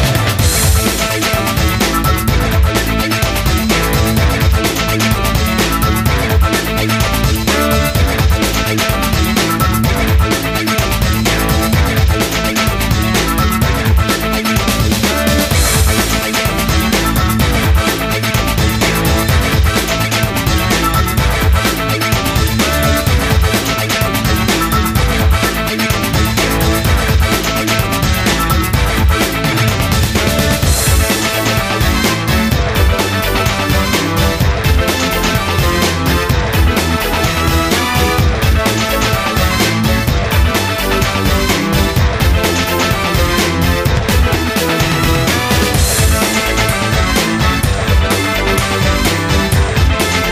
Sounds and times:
Theme music: 0.0s - 50.3s.

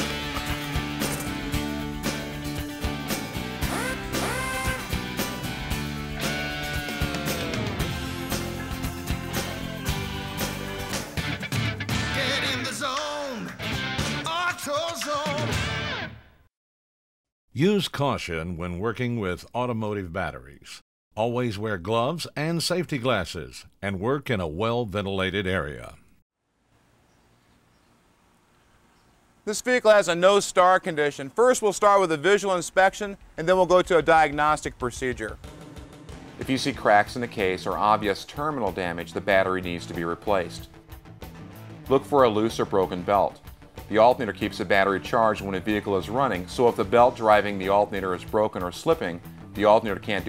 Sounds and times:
Speech: 17.6s - 26.1s, 29.5s - 35.4s, 36.4s - 40.7s, 41.9s - 50.2s.

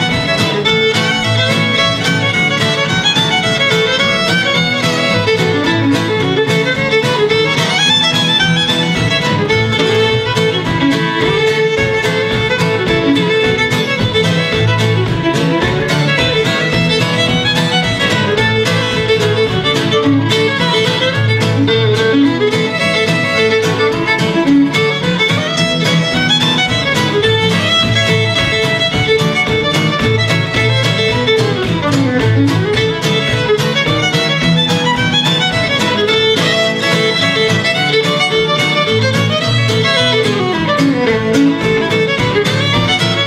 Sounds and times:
Violin, fiddle: 0.0s - 43.2s.

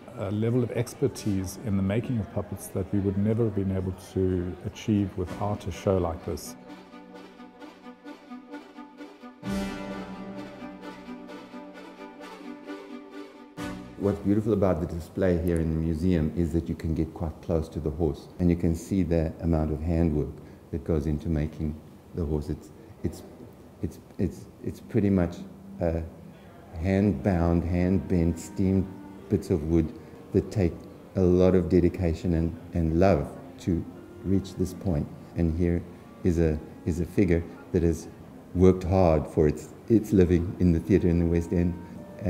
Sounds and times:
Speech: 0.0s - 6.6s, 14.0s - 42.2s
Music: 0.0s - 20.4s, 21.1s - 42.2s.

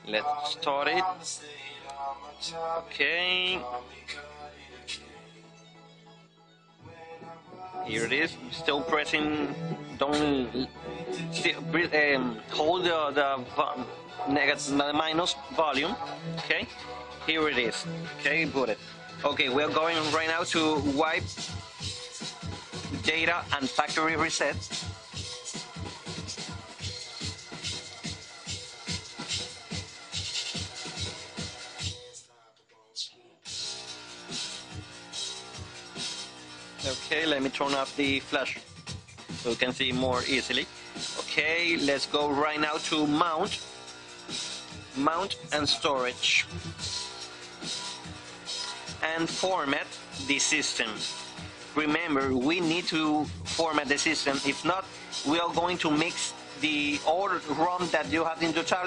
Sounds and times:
Scratching (performance technique): 19.6s - 32.2s.

